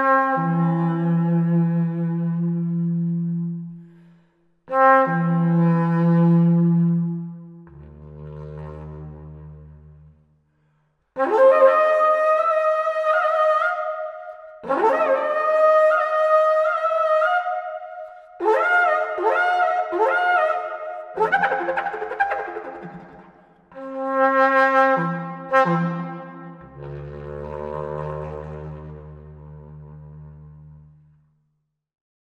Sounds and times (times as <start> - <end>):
Music: 0.0 - 31.9.